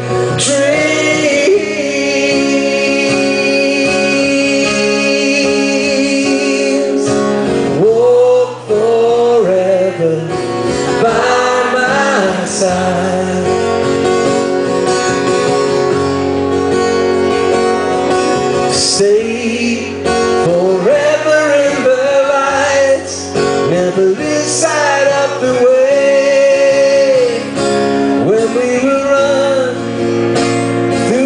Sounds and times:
Music: 0.0 - 31.2.

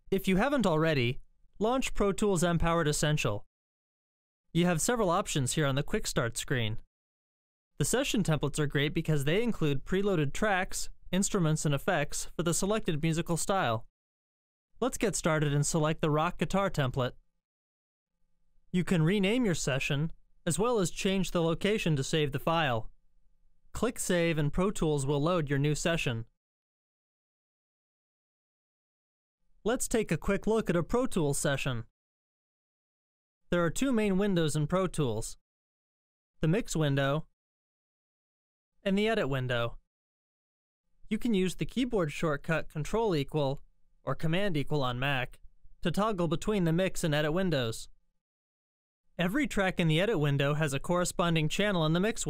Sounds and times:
Speech: 0.1 - 3.5, 4.6 - 6.9, 7.8 - 13.9, 14.8 - 17.2, 18.8 - 22.9, 23.8 - 26.3, 29.7 - 31.9, 33.6 - 35.4, 36.4 - 37.3, 38.9 - 39.8, 41.1 - 47.9, 49.2 - 52.2.

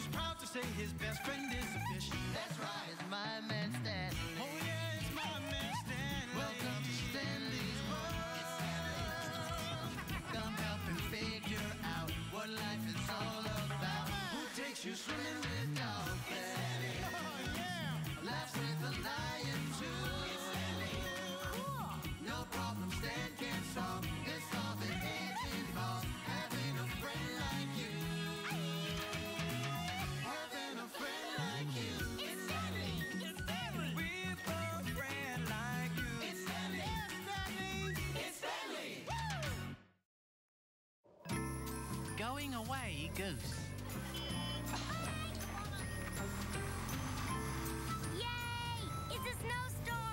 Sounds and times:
Music: 0.0 - 40.0, 41.2 - 50.1.

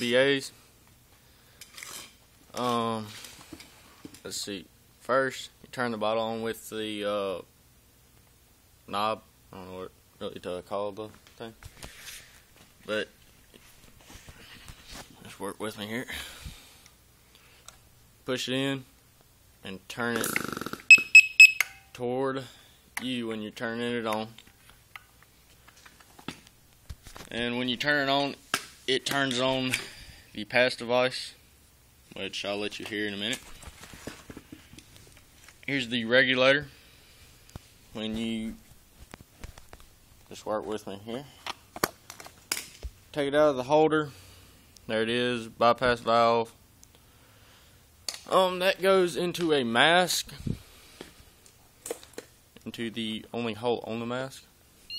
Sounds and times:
Speech: 0.0 - 0.6, 2.5 - 3.2, 4.2 - 7.5, 8.9 - 11.6, 12.8 - 13.1, 15.2 - 16.2, 18.2 - 18.9, 19.6 - 20.4, 22.0 - 24.4, 27.3 - 29.8, 30.4 - 31.4, 32.1 - 33.4, 35.7 - 36.7, 38.0 - 38.6, 40.3 - 41.4, 43.1 - 44.2, 44.9 - 46.6, 48.3 - 50.4, 52.6 - 54.5.

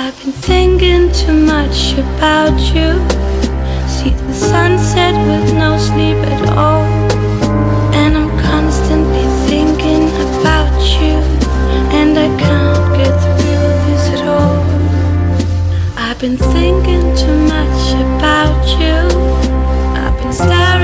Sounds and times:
Music: 0.0 - 20.8.

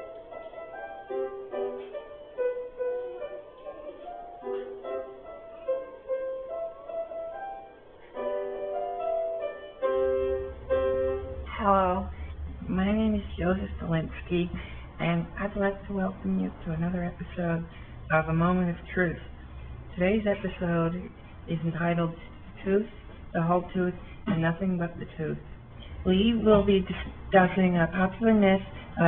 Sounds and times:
Speech: 11.5 - 19.3, 19.9 - 25.4, 26.1 - 29.0.

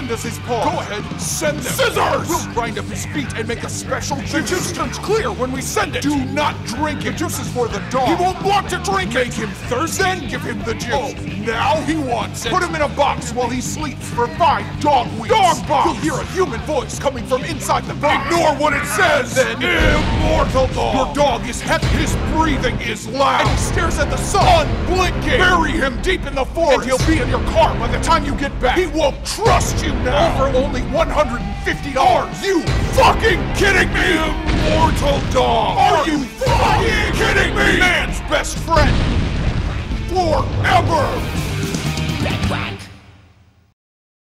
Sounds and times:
Speech: 0.0 - 39.0, 40.0 - 41.4, 42.2 - 43.0
Music: 0.0 - 43.7.

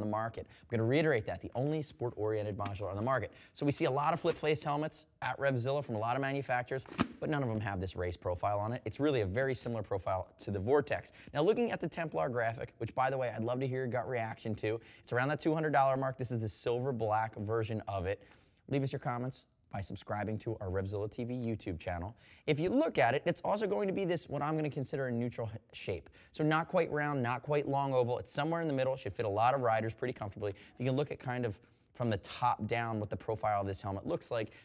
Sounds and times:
Speech: 0.0 - 34.6.

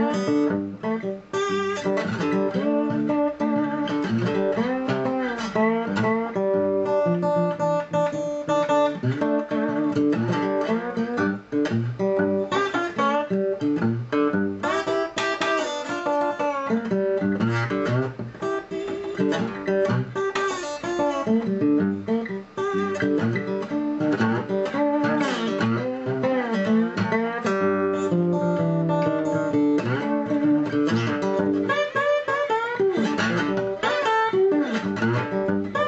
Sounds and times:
Steel guitar, slide guitar: 0.0 - 35.8.

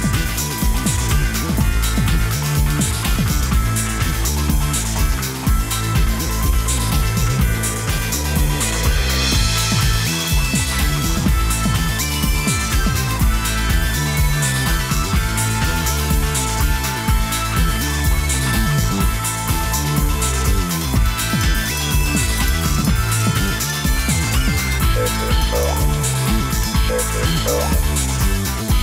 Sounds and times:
Music: 0.0 - 28.8.

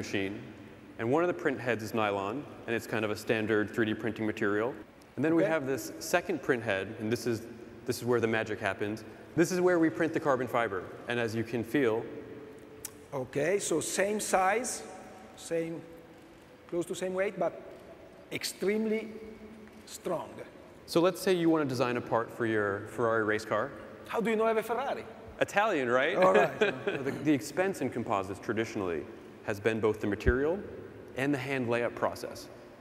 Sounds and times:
Speech: 0.0 - 0.4, 1.0 - 12.1, 13.1 - 15.9, 16.7 - 17.6, 18.3 - 19.2, 19.9 - 30.6, 31.2 - 32.5.

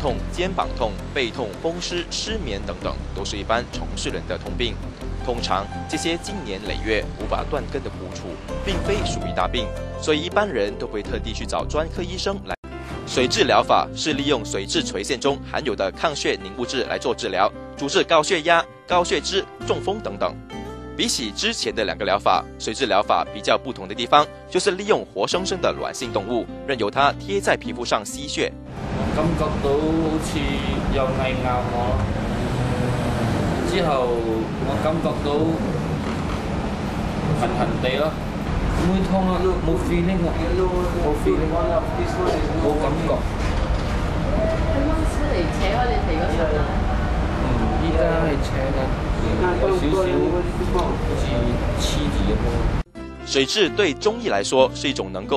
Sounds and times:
Speech: 0.0 - 20.4, 21.0 - 28.5, 29.2 - 32.0, 33.7 - 35.7, 37.4 - 38.2, 38.8 - 43.2, 47.5 - 55.3
Music: 0.0 - 55.3.

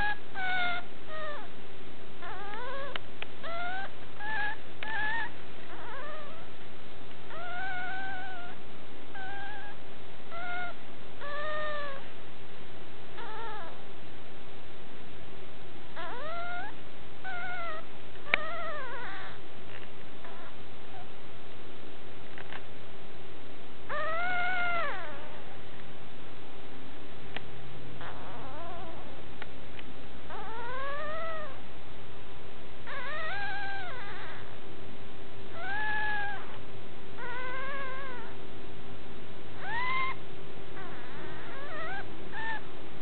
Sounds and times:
Whimper (dog): 0.0 - 1.5, 2.2 - 6.6, 7.3 - 12.0, 13.2 - 13.9, 16.0 - 19.4, 20.2 - 21.1, 23.9 - 25.6, 28.0 - 29.2, 30.3 - 31.6, 32.9 - 34.6, 35.5 - 36.6, 37.2 - 38.4, 39.6 - 40.2, 40.8 - 42.7
Yip: 0.0 - 1.5, 2.2 - 6.5, 7.3 - 12.0, 13.2 - 13.8, 16.0 - 19.4, 20.2 - 21.1, 23.9 - 25.5, 28.0 - 29.2, 30.3 - 31.6, 32.9 - 34.5, 35.5 - 36.6, 37.2 - 38.4, 39.6 - 40.2, 40.8 - 42.7.

